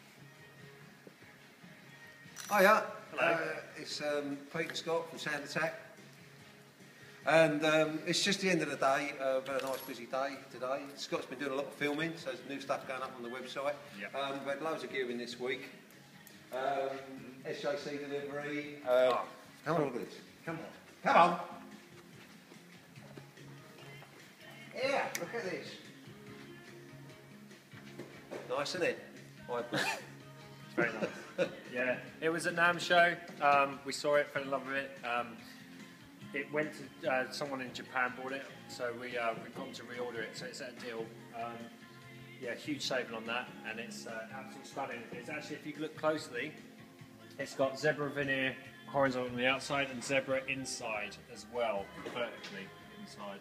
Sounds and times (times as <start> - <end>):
Music: 0.0 - 53.4.